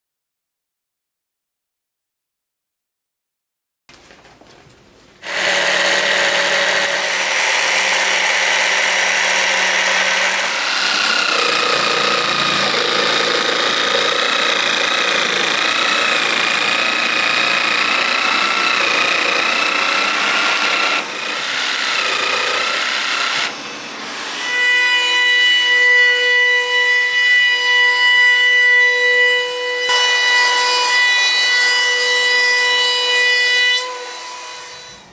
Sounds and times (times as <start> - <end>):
Power tool: 5.2 - 35.1.